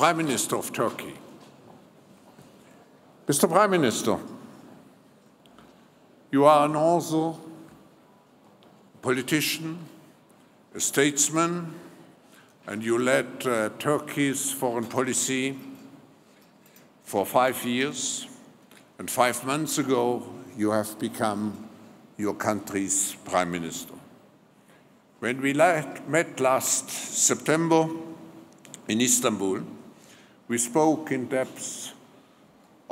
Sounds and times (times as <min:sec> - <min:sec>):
Speech: 0:00.0 - 0:01.4, 0:03.2 - 0:04.5, 0:06.3 - 0:07.6, 0:09.0 - 0:10.0, 0:10.7 - 0:11.9, 0:12.7 - 0:15.8, 0:17.0 - 0:18.4, 0:19.0 - 0:24.1, 0:25.2 - 0:28.2, 0:28.8 - 0:29.8, 0:30.5 - 0:32.0.